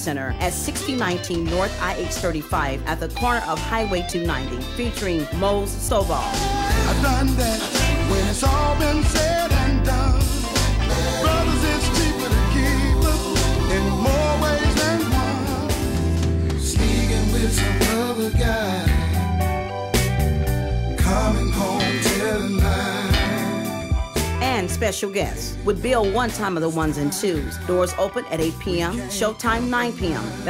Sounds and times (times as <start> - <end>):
Speech: 0.0 - 6.6, 24.4 - 30.5
Rhythm and blues: 0.0 - 30.5
Soul music: 0.0 - 30.5
Blues: 0.2 - 30.5.